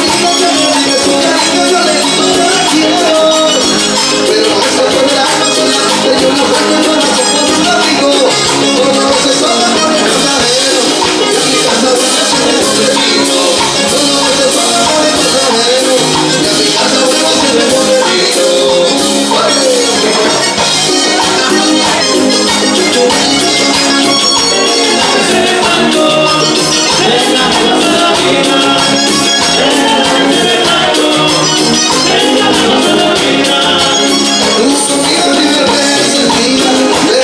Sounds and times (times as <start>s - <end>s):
Music: 0.0s - 37.2s.